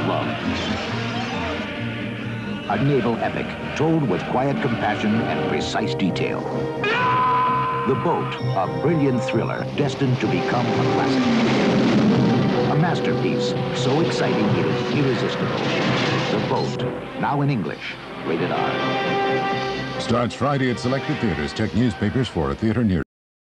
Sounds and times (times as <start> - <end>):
Music: 0.0 - 23.0
Speech: 2.7 - 6.4, 7.9 - 11.3, 12.7 - 15.6, 16.3 - 18.8, 20.0 - 23.1.